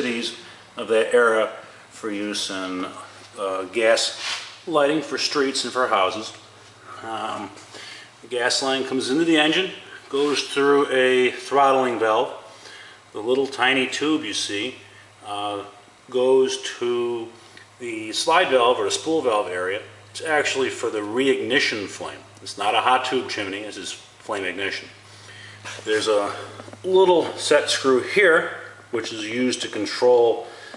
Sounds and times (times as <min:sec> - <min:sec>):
Speech: 0:00.0 - 0:07.6, 0:08.2 - 0:12.5, 0:13.1 - 0:25.0, 0:25.7 - 0:30.7.